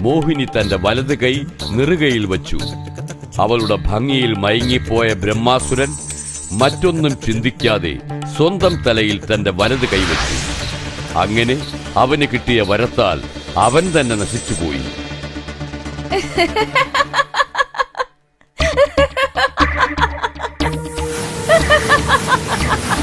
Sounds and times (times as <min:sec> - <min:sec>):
Speech: 0:00.0 - 0:10.4, 0:11.1 - 0:15.0
Music: 0:00.0 - 0:23.0.